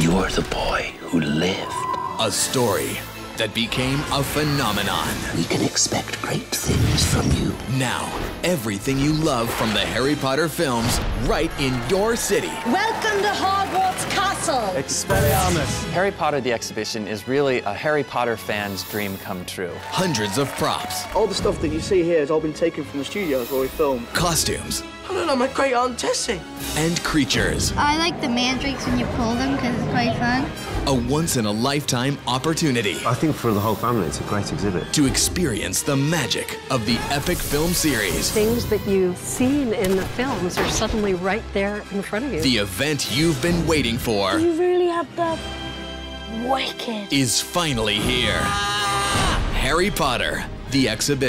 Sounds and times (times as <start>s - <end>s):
Music: 0.0s - 51.2s.